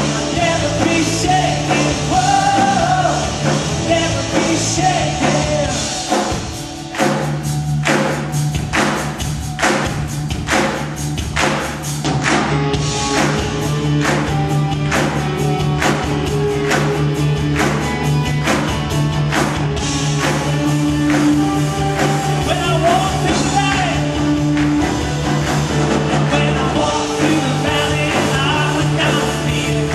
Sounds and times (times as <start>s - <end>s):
Singing: 0.0s - 6.4s, 26.2s - 29.9s
Rock and roll: 0.0s - 29.9s.